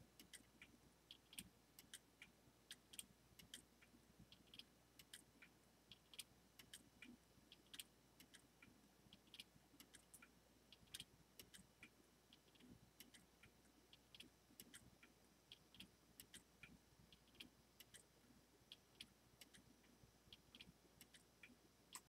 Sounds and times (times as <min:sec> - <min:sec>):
Tick-tock: 0:00.1 - 0:18.1, 0:18.7 - 0:22.1.